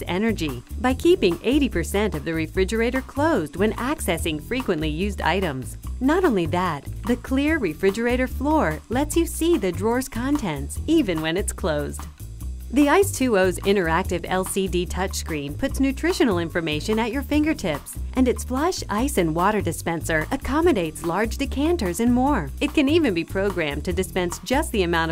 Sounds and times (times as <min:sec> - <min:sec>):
Speech: 0:00.0 - 0:12.1, 0:12.7 - 0:25.1
Music: 0:00.0 - 0:25.1.